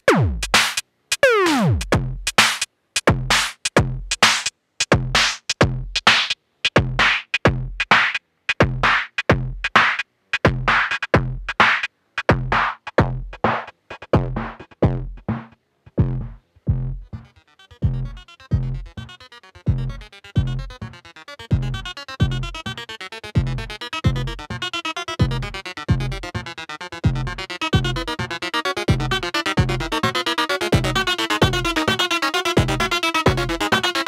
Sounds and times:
Electronic dance music: 0:00.0 - 0:06.4, 0:08.8 - 0:15.6, 0:17.0 - 0:34.0.

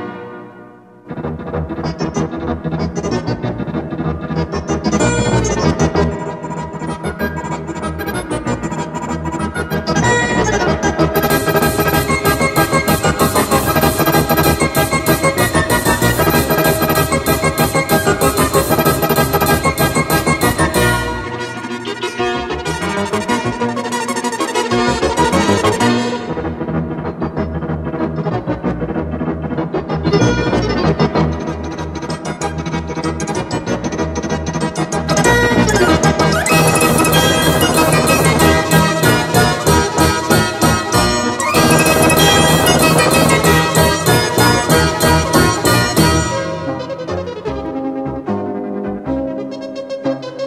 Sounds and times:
Music: 0:00.0 - 0:50.4.

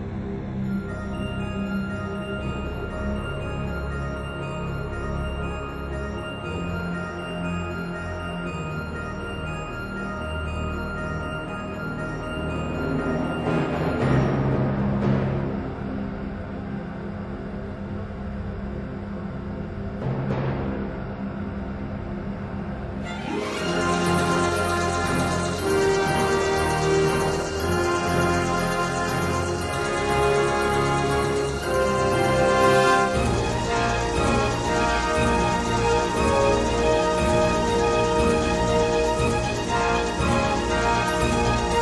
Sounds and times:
Music: 0:00.0 - 0:41.8.

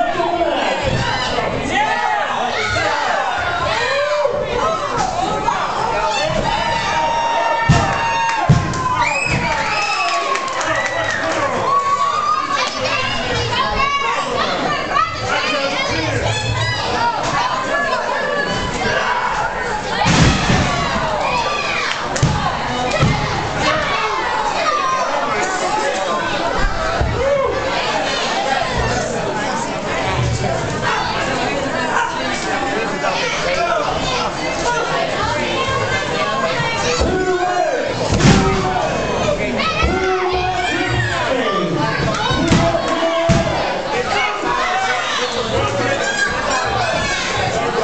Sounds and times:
Speech: 0:00.0 - 0:08.5, 0:09.1 - 0:47.8.

